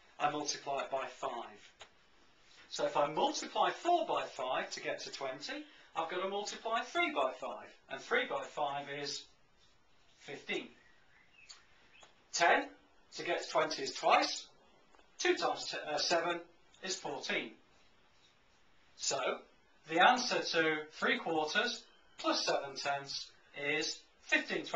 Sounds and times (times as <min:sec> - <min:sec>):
Speech: 0:00.2 - 0:01.8, 0:02.7 - 0:09.4, 0:10.2 - 0:10.8, 0:12.3 - 0:14.6, 0:15.2 - 0:17.6, 0:19.0 - 0:24.7.